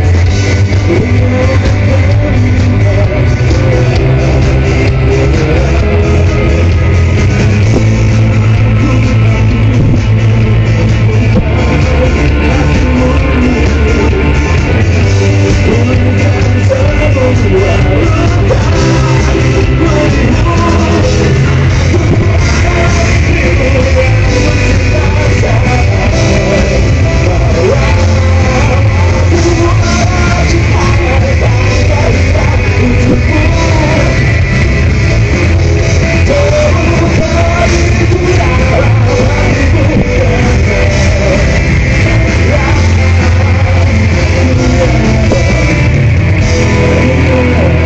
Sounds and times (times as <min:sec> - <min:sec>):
Pop music: 0:00.0 - 0:47.8.